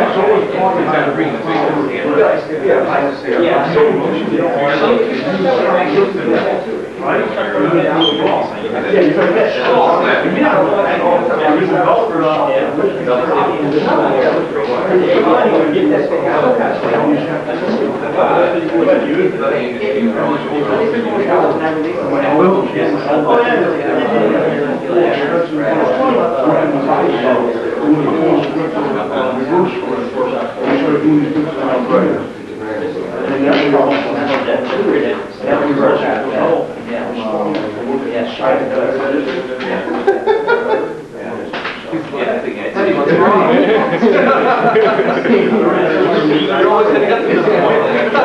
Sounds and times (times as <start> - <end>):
Speech: 0.0 - 48.2.